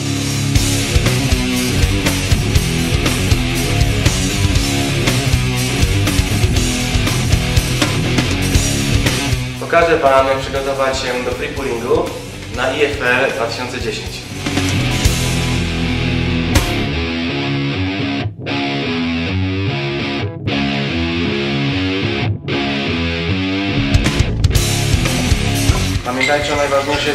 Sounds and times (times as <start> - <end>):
Music: 0.0 - 27.1
Speech: 9.6 - 14.3, 26.0 - 27.1.